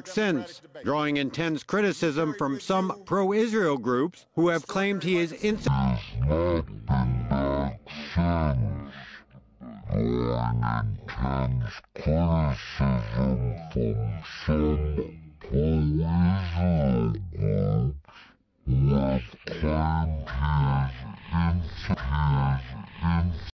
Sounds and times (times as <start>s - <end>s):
Speech synthesizer: 0.0s - 18.0s, 18.7s - 23.5s.